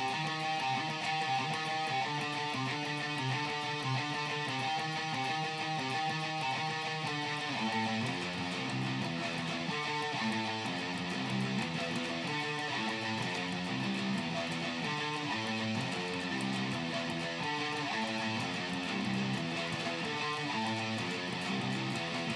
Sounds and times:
Guitar: 0.0s - 22.3s.

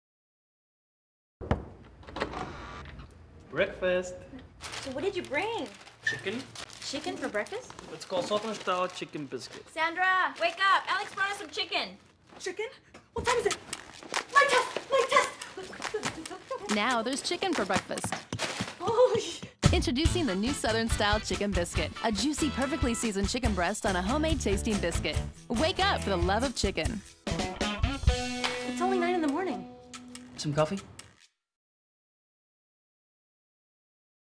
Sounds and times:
Music: 19.6s - 30.9s.

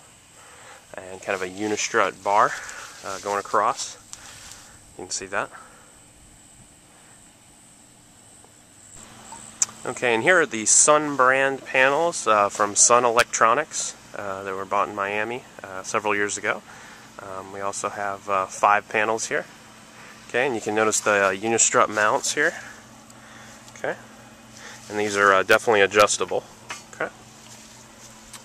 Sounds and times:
Speech: 0.9s - 4.0s, 5.0s - 5.6s, 9.8s - 19.5s, 20.3s - 22.8s, 23.8s - 24.1s, 24.9s - 27.2s.

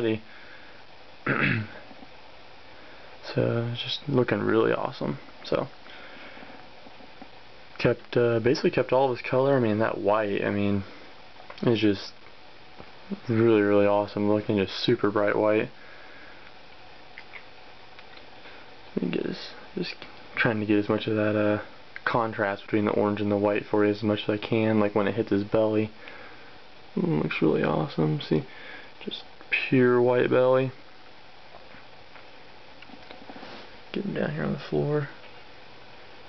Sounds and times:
Speech: 0.0s - 0.3s, 3.2s - 5.8s, 7.8s - 10.9s, 11.6s - 12.2s, 13.1s - 15.8s, 19.0s - 26.0s, 27.0s - 30.8s, 33.9s - 35.2s.

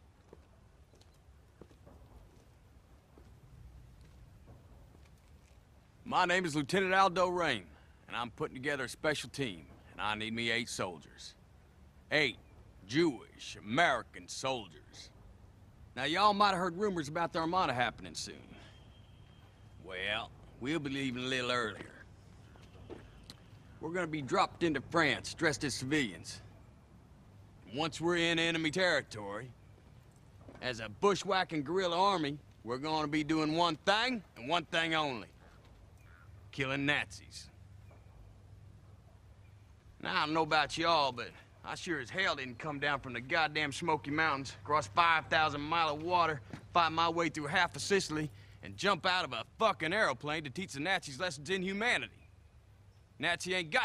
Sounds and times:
Narration, monologue: 0.0s - 53.8s
Male speech, man speaking: 6.0s - 11.4s, 12.1s - 15.1s, 16.0s - 18.7s, 19.8s - 22.0s, 23.8s - 26.5s, 27.7s - 29.5s, 30.6s - 35.4s, 36.5s - 37.5s, 40.0s - 52.2s, 53.2s - 53.8s.

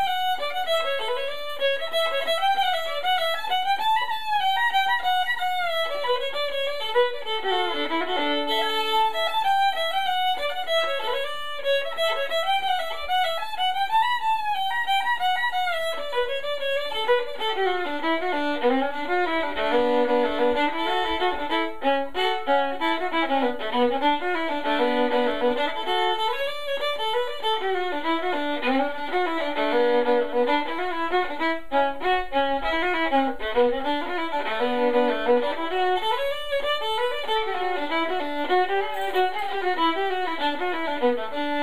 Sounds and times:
Violin, fiddle: 0.0s - 41.6s.

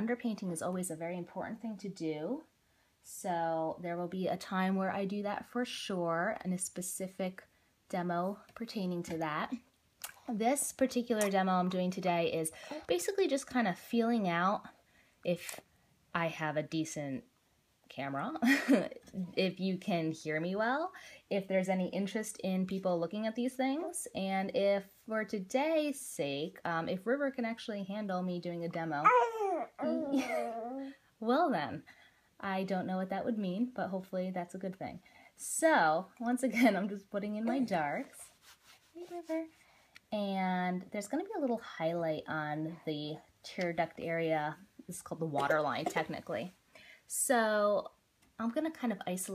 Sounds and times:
Babbling: 29.0s - 30.9s.

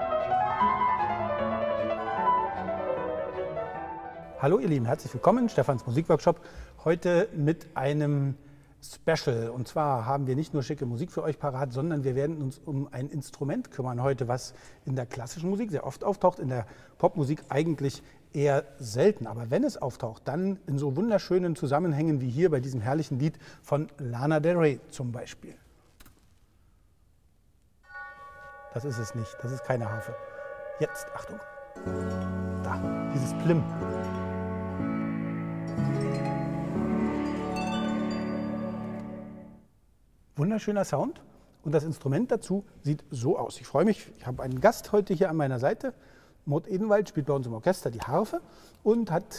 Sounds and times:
Speech: 4.4s - 25.6s, 28.8s - 30.2s, 30.8s - 31.4s, 32.6s - 33.7s, 40.4s - 49.3s
Harp: 27.9s - 39.6s.

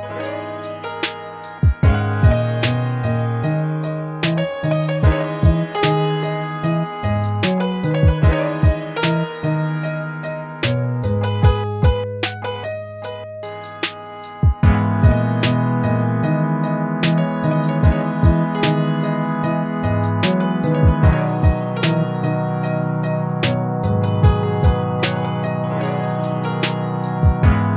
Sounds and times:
Music: 0.0s - 27.7s.

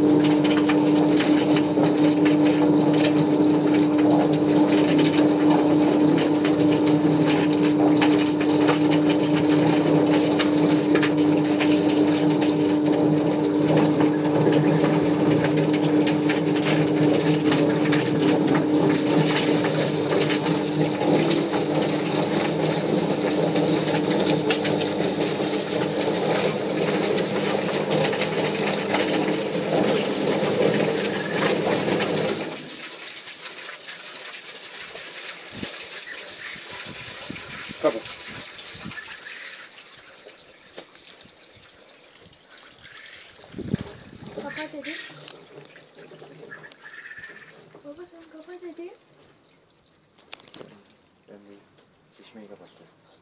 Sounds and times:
Speech: 37.8s - 38.1s, 44.4s - 45.1s, 47.8s - 49.0s, 50.7s - 53.0s.

